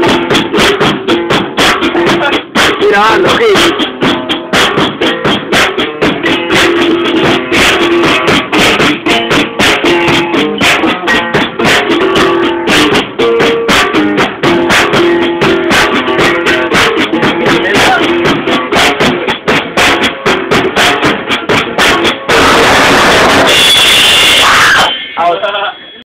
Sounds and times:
Music: 0:00.0 - 0:26.0
Speech: 0:02.1 - 0:03.7, 0:17.5 - 0:18.1, 0:25.2 - 0:26.0.

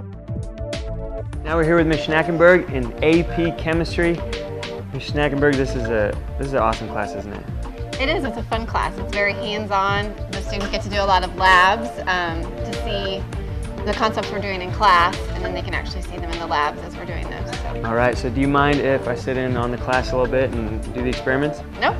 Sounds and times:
Music: 0:00.0 - 0:21.9
Speech: 0:05.0 - 0:07.4, 0:08.0 - 0:13.2, 0:13.9 - 0:21.9.

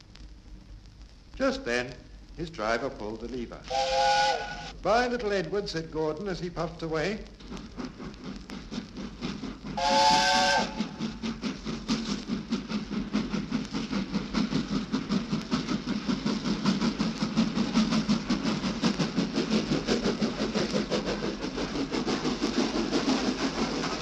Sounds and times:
Steam whistle: 0:03.6 - 0:04.8, 0:09.8 - 0:11.0.

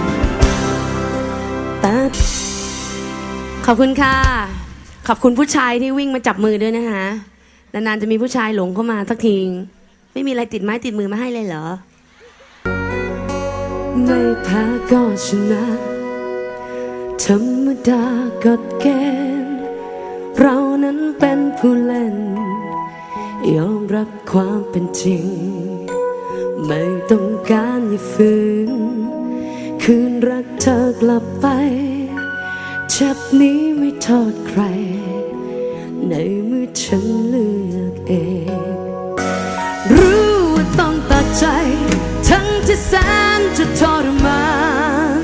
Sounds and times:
Independent music: 0:00.0 - 0:07.5, 0:11.8 - 0:45.2
Speech: 0:03.7 - 0:11.9.

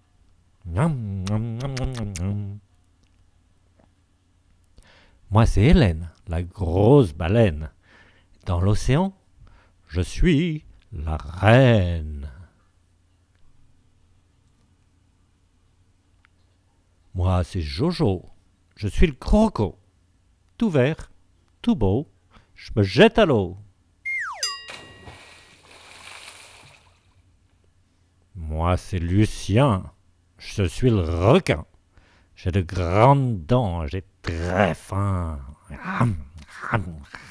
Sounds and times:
Speech: 0:00.6 - 0:02.6, 0:05.3 - 0:07.8, 0:08.4 - 0:09.2, 0:09.9 - 0:12.6, 0:17.1 - 0:19.8, 0:20.6 - 0:23.7, 0:28.3 - 0:31.8, 0:32.4 - 0:37.3.

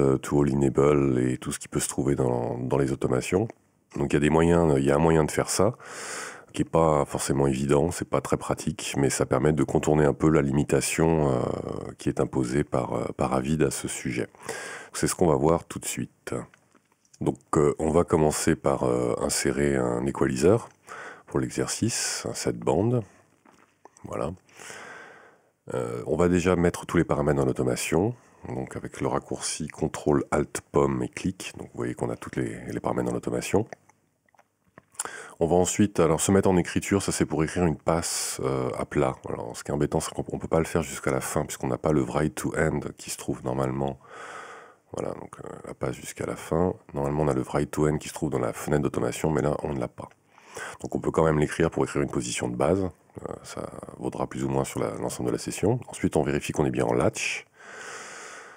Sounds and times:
Speech: 0:00.0 - 0:05.8, 0:06.5 - 0:16.6, 0:17.2 - 0:23.1, 0:24.0 - 0:24.4, 0:25.7 - 0:33.8, 0:35.0 - 0:44.0, 0:44.9 - 0:57.5.

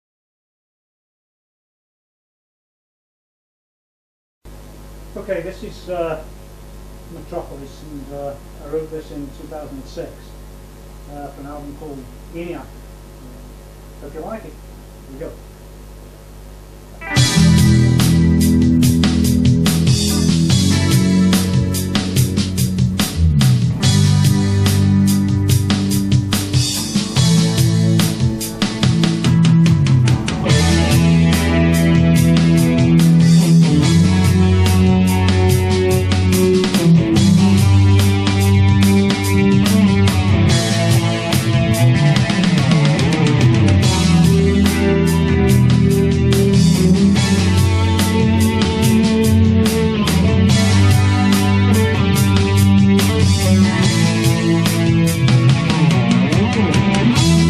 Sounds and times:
Electric guitar: 0:16.9 - 0:57.5
Strum: 0:17.0 - 0:57.5.

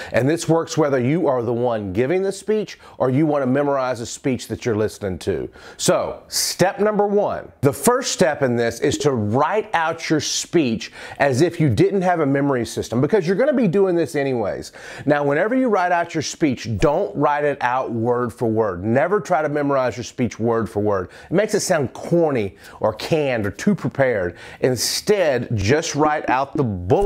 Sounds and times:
Male speech, man speaking: 0:00.0 - 0:27.0.

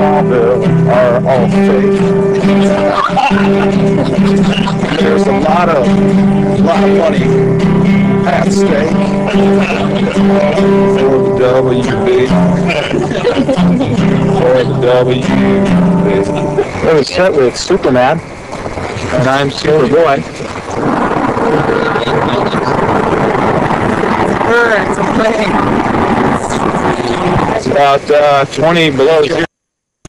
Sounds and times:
Speech: 0:00.0 - 0:07.4, 0:08.2 - 0:18.2, 0:19.0 - 0:29.5.

